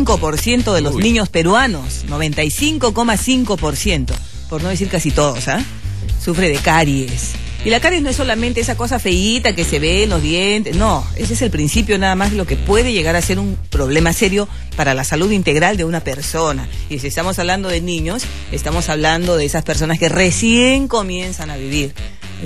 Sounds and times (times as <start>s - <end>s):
Music: 0.0s - 22.4s
Speech: 0.0s - 22.4s.